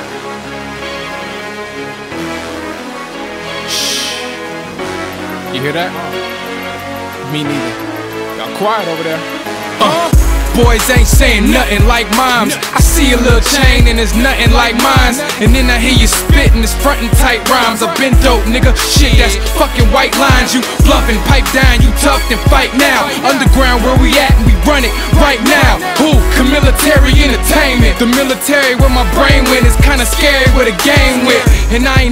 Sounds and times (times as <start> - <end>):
Music: 0.0 - 32.1.